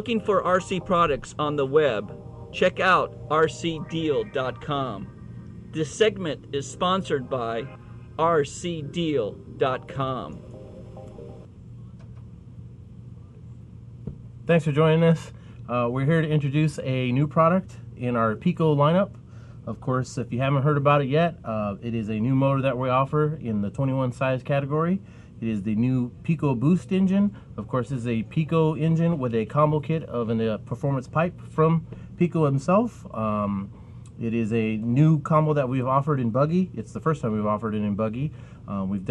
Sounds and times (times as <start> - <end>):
Speech: 0.0 - 5.1, 5.8 - 10.4, 14.5 - 39.1.